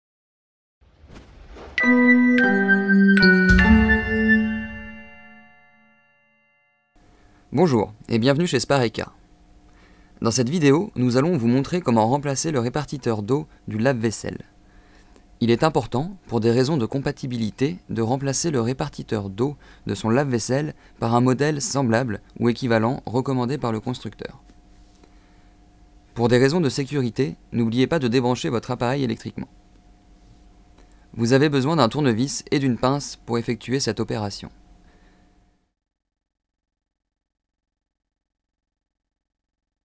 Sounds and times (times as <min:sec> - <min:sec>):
Music: 0:01.8 - 0:06.9
Speech: 0:07.5 - 0:09.2, 0:10.2 - 0:14.5, 0:15.4 - 0:24.4, 0:26.2 - 0:29.5, 0:31.2 - 0:34.6.